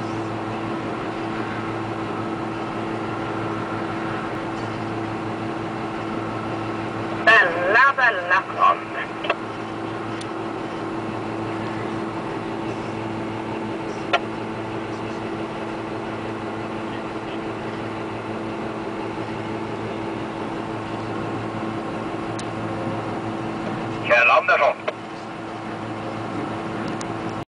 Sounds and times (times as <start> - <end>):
Speech: 24.0 - 25.0.